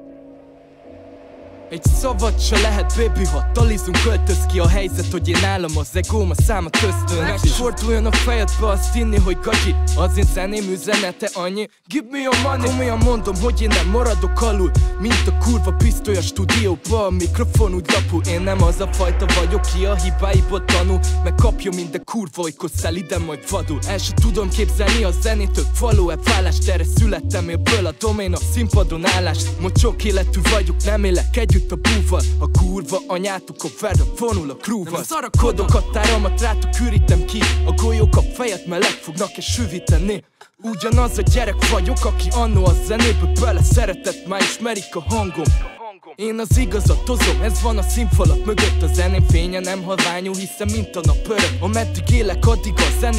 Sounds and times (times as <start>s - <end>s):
Pop music: 1.7s - 53.1s
Funk: 22.8s - 33.0s, 46.5s - 53.1s.